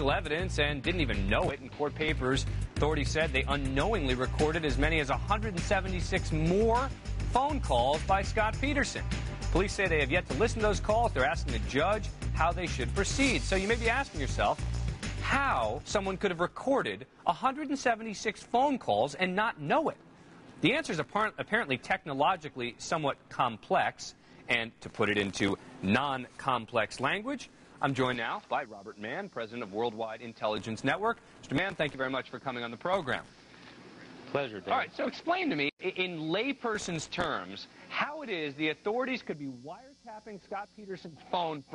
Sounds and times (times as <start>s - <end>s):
Speech: 0.0s - 9.0s, 9.6s - 14.6s, 15.2s - 20.0s, 20.6s - 33.3s, 34.3s - 41.7s.